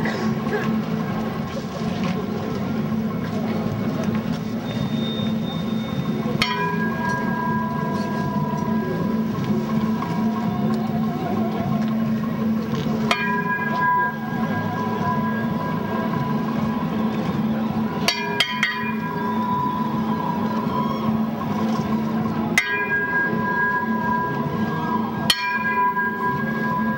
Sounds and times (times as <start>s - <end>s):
Tubular bells: 0.0s - 26.9s.